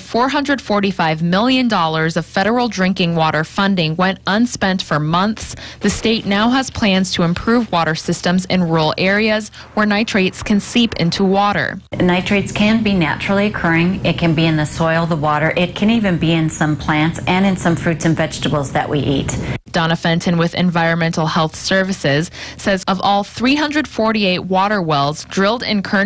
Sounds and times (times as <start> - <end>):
Speech: 0.0 - 26.0.